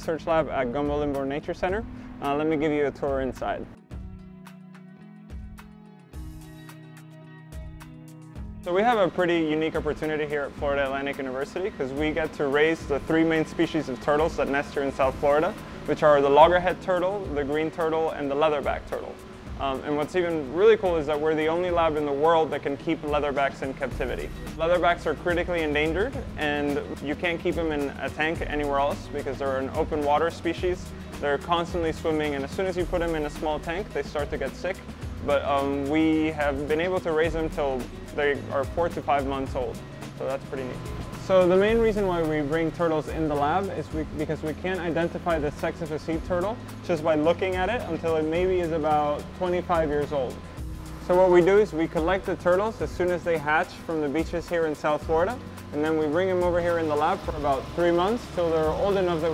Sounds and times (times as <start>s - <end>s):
Speech: 0.0s - 3.7s, 8.7s - 50.4s, 51.1s - 59.3s
Music: 0.0s - 59.3s.